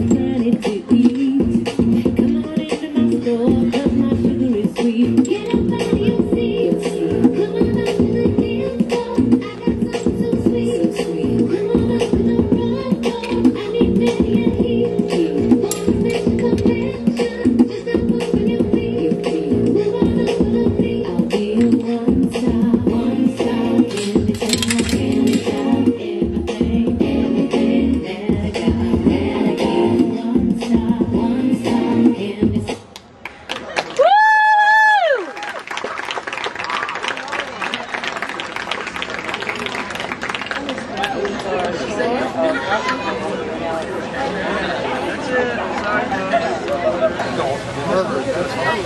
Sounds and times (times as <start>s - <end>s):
Chatter: 36.6s - 48.8s
Speech: 40.7s - 48.8s.